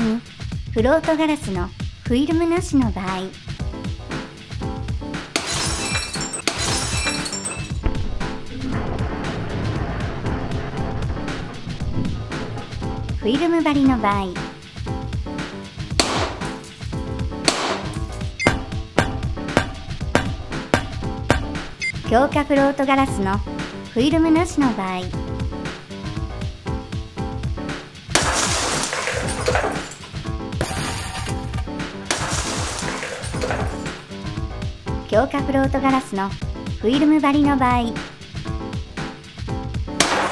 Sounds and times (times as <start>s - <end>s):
Music: 0.0s - 40.3s
Shatter: 5.4s - 7.8s, 16.0s - 16.8s, 17.5s - 21.0s, 28.2s - 34.0s, 40.0s - 40.3s.